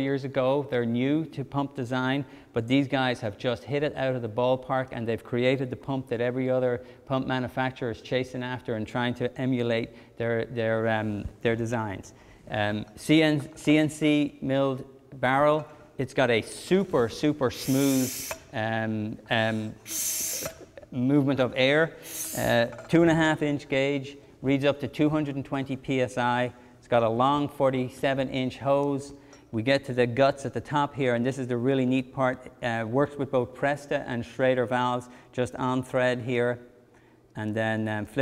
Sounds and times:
Speech: 0:00.0 - 0:19.8, 0:20.9 - 0:36.6, 0:37.4 - 0:38.2.

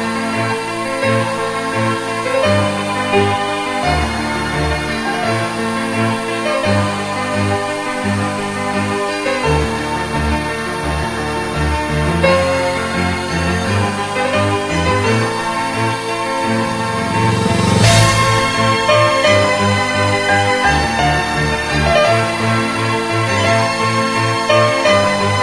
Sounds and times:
Music: 0:00.0 - 0:25.4.

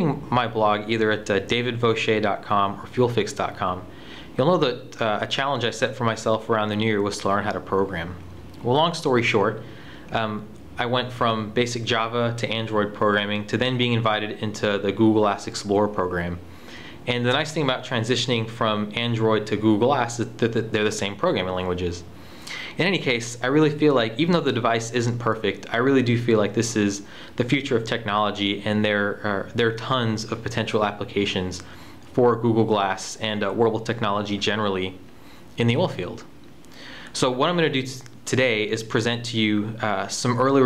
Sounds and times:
Speech: 0:00.0 - 0:16.4, 0:17.1 - 0:22.1, 0:22.8 - 0:35.0, 0:35.6 - 0:36.3, 0:37.2 - 0:40.6.

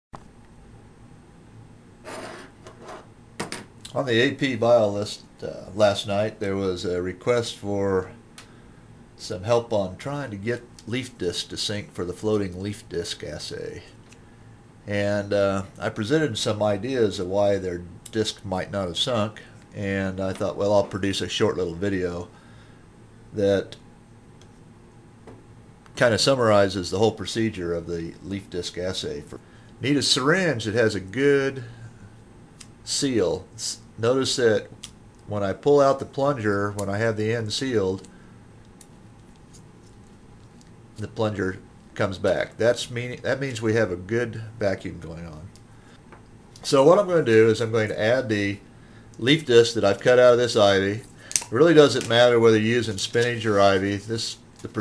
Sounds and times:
Speech: 0:03.9 - 0:08.2, 0:09.2 - 0:14.0, 0:14.8 - 0:22.3, 0:23.3 - 0:23.8, 0:26.0 - 0:31.8, 0:32.8 - 0:34.7, 0:35.3 - 0:38.1, 0:41.0 - 0:45.6, 0:46.6 - 0:48.6, 0:49.2 - 0:54.8.

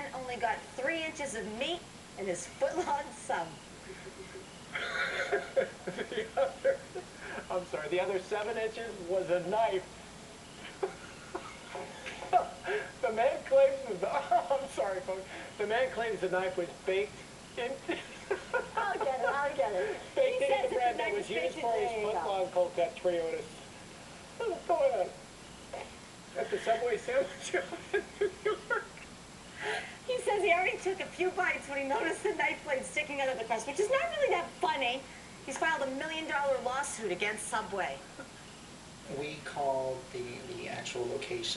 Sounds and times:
Laughter: 0:03.9 - 0:07.1, 0:10.6 - 0:12.6, 0:14.0 - 0:14.7, 0:17.9 - 0:20.6, 0:26.4 - 0:29.0.

